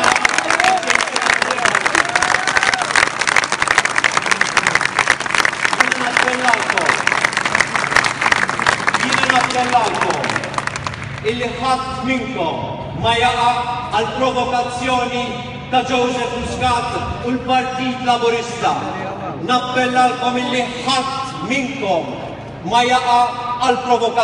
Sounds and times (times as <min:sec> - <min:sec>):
Speech: 0:05.8 - 0:07.0, 0:09.0 - 0:10.4, 0:11.3 - 0:24.2.